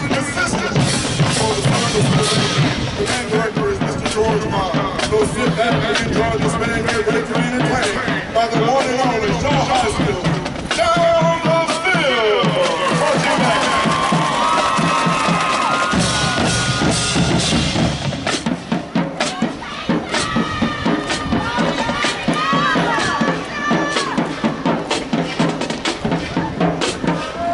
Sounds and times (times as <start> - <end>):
Speech: 0.0 - 13.7
Music: 0.0 - 27.5.